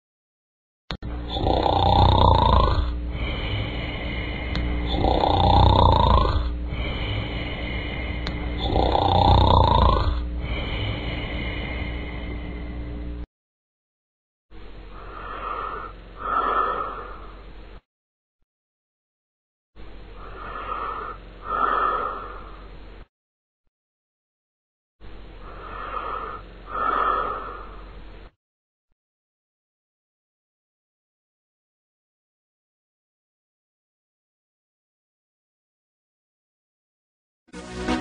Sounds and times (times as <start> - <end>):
Breathing: 3.0 - 5.1, 6.6 - 8.7, 10.2 - 13.1, 14.9 - 17.5, 20.2 - 22.8, 25.4 - 28.0.